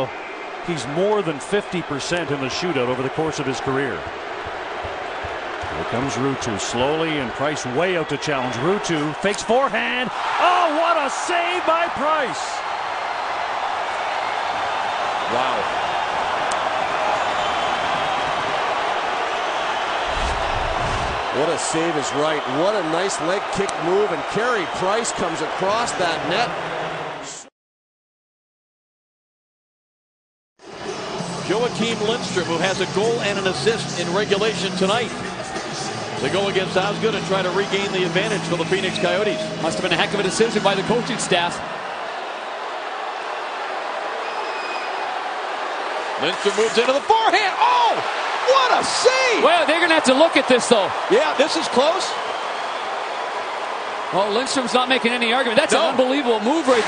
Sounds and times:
Speech: 0.7 - 4.0, 5.8 - 12.6, 21.4 - 26.6, 31.5 - 35.1, 36.2 - 41.6, 46.2 - 52.2, 54.2 - 56.8
Music: 30.6 - 41.6.

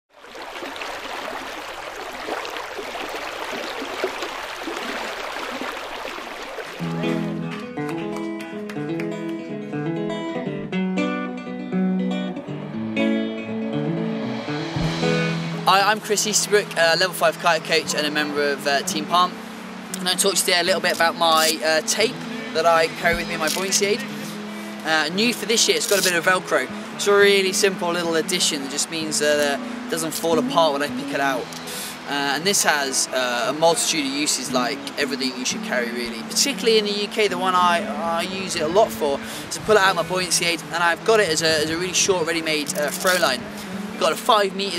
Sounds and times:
Music: 6.8 - 44.7.

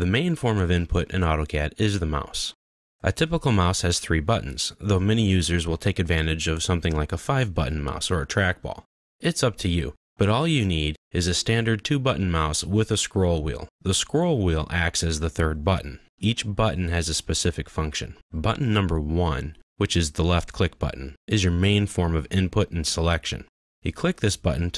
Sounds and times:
Speech: 0.0 - 24.7.

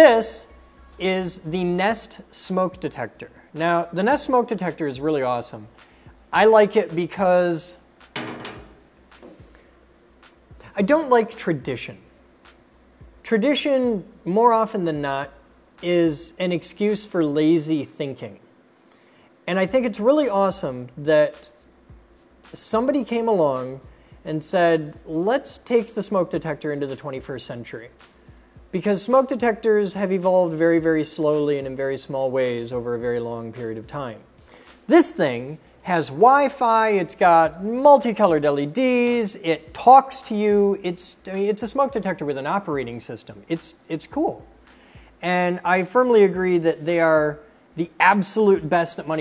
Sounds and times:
Speech: 0.0 - 5.7, 6.3 - 7.8, 10.7 - 12.1, 13.2 - 18.4, 19.4 - 21.6, 22.5 - 28.0, 28.7 - 34.3, 34.9 - 44.5, 45.2 - 49.2
Music: 0.0 - 49.2.

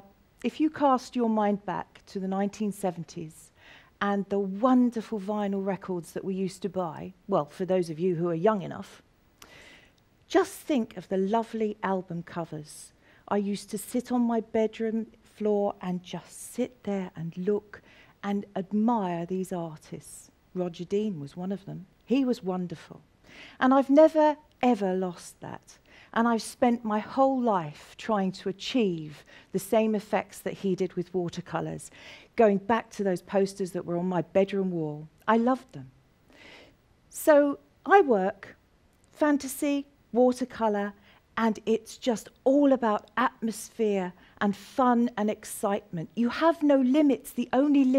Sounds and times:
Speech: 0.0 - 9.0, 10.3 - 23.0, 23.6 - 36.0, 37.1 - 38.6, 39.2 - 47.9.

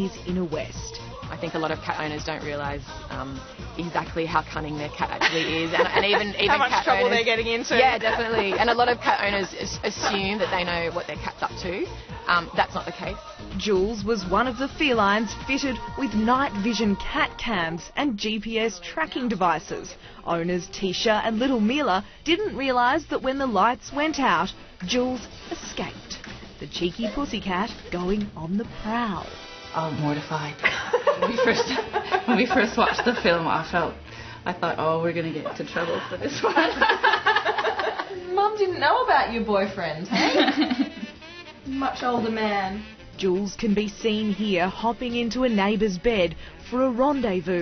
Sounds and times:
Female speech, woman speaking: 0.0 - 30.6, 31.2 - 36.8, 38.1 - 40.2, 41.7 - 47.6
Music: 0.0 - 47.6.

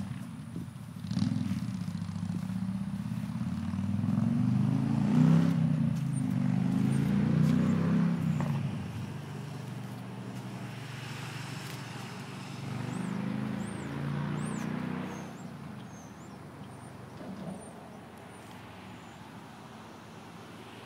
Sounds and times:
Vehicle: 0.0 - 20.8.

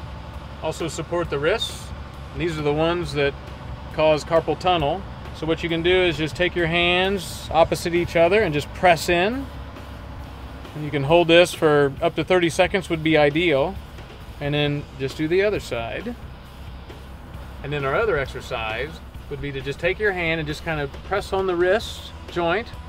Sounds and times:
Music: 0.0 - 22.8
Speech: 0.6 - 3.3, 3.9 - 9.5, 10.8 - 13.8, 14.4 - 16.2, 17.6 - 22.8.

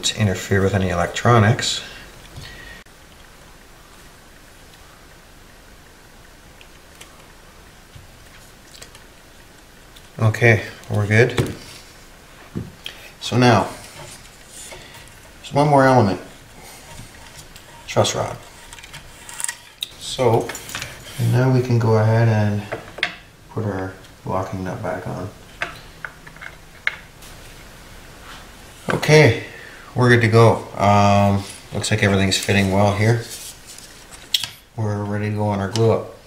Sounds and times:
Speech: 0.0 - 2.0, 10.2 - 11.6, 13.2 - 13.8, 15.4 - 16.3, 17.9 - 18.4, 20.0 - 20.6, 21.2 - 22.7, 23.5 - 25.4, 28.9 - 33.4, 34.8 - 36.2.

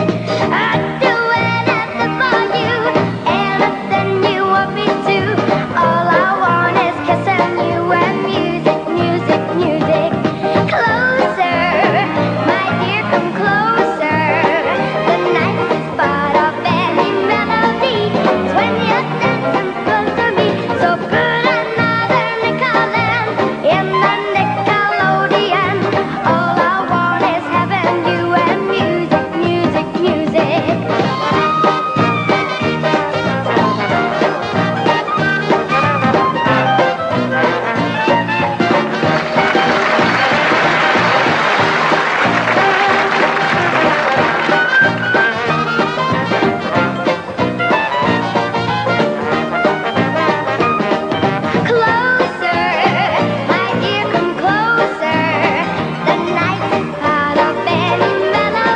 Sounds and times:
Music: 0.0 - 58.7.

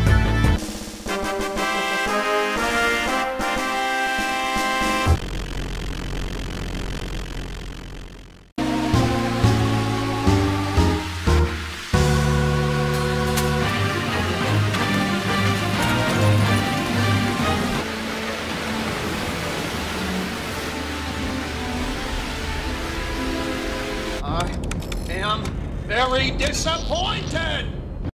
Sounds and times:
Music: 0.0 - 5.2, 8.6 - 24.2
Speech: 24.2 - 27.8.

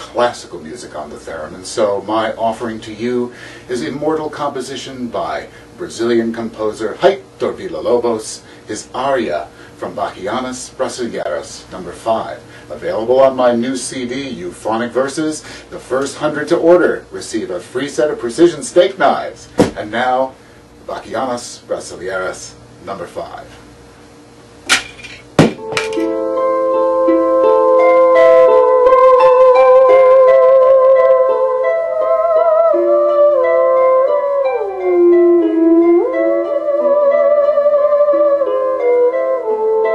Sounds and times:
Classical music: 25.6 - 39.9
Theremin: 26.0 - 39.9.

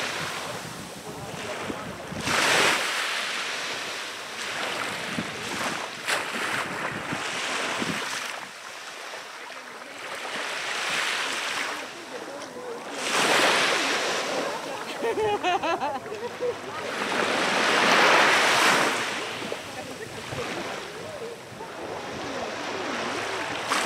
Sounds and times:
Ocean: 0.0 - 23.8
Outside, rural or natural: 0.0 - 23.8
Speech: 0.3 - 2.4, 11.6 - 15.0, 19.4 - 23.5.

